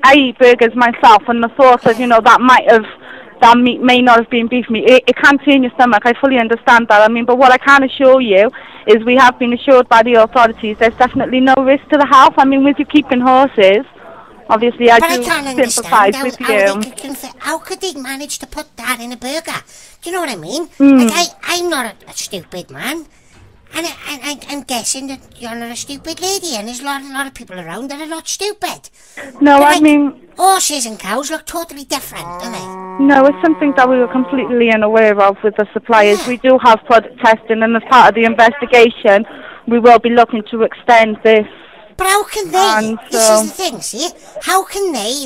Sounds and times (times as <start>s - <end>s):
Speech: 0.0s - 23.1s, 23.7s - 45.2s.